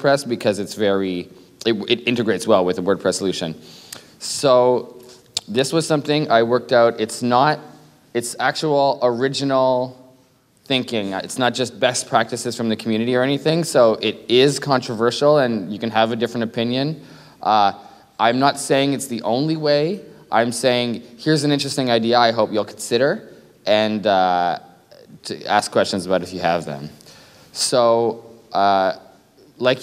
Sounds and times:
Speech: 0:00.0 - 0:03.6, 0:04.2 - 0:27.0, 0:27.6 - 0:29.8.

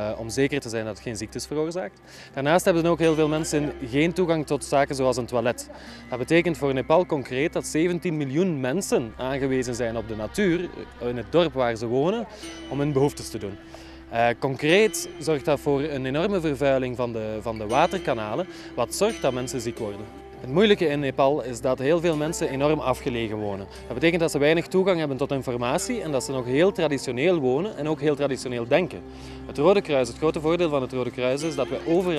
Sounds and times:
Speech: 0:00.0 - 0:13.6, 0:14.2 - 0:32.1
Tender music: 0:00.0 - 0:32.1.

